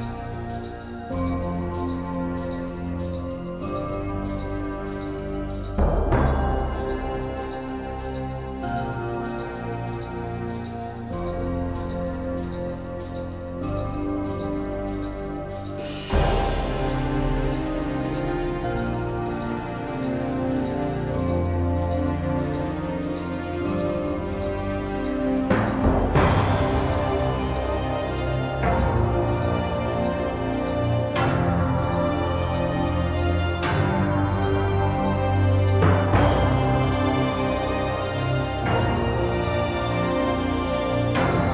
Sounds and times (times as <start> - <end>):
Music: 0.0 - 41.5.